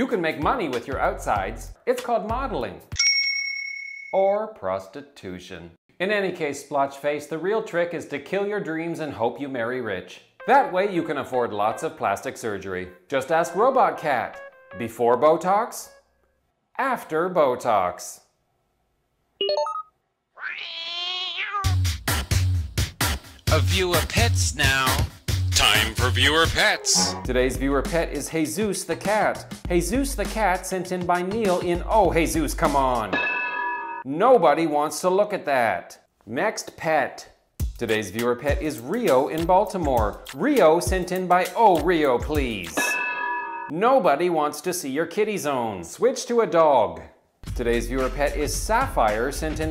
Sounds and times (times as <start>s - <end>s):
Speech: 0.0s - 2.8s, 4.2s - 15.9s, 16.8s - 18.3s, 23.5s - 25.0s, 25.6s - 33.2s, 34.1s - 42.8s, 43.7s - 49.7s
Music: 0.4s - 3.0s, 10.4s - 16.0s, 21.7s - 33.2s, 37.6s - 42.8s, 47.4s - 49.7s.